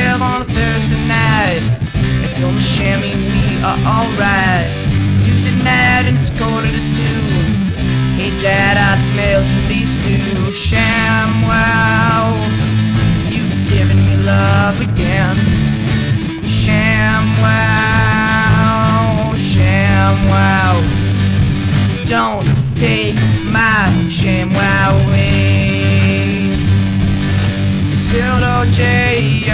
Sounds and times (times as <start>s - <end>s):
Guitar: 0.0s - 29.5s.